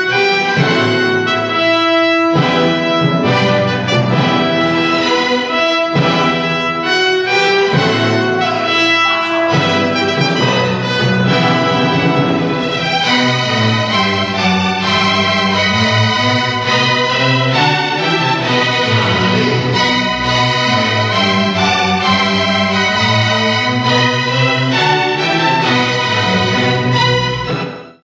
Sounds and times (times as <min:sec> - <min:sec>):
Orchestra: 0:00.0 - 0:28.0.